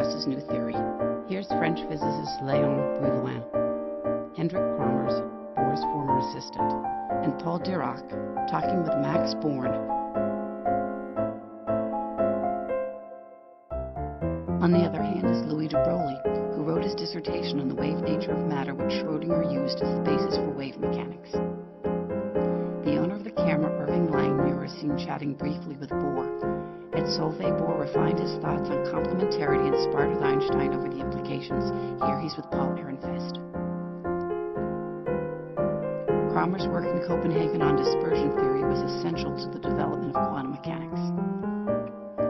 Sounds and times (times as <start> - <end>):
Speech: 0.0 - 3.4, 4.4 - 9.8, 14.6 - 21.4, 22.8 - 26.3, 27.0 - 33.4, 36.3 - 41.1
Music: 0.0 - 42.2.